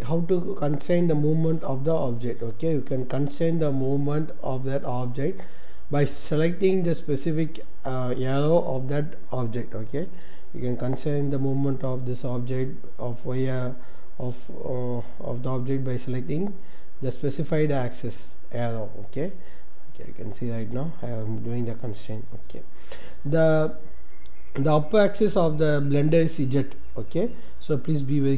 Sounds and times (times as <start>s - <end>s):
Speech: 0.0s - 19.4s, 20.0s - 23.8s, 24.6s - 28.3s.